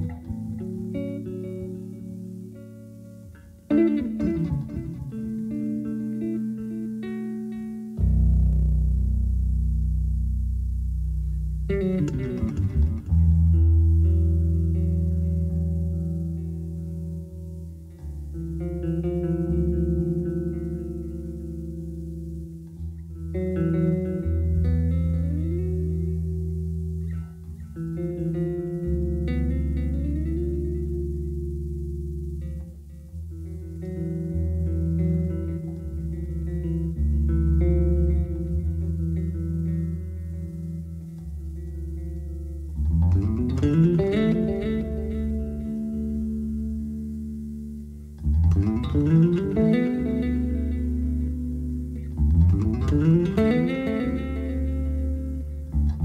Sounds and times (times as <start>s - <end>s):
Bass guitar: 0.0s - 56.0s.